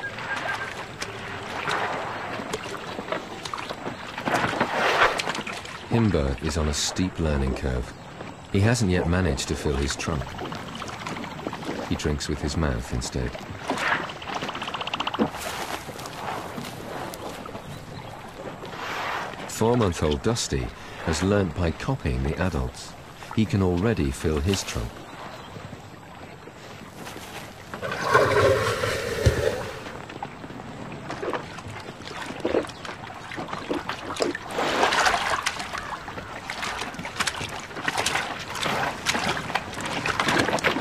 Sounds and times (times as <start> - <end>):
Speech: 5.9 - 7.9, 8.5 - 10.3, 11.9 - 13.4, 19.5 - 25.0.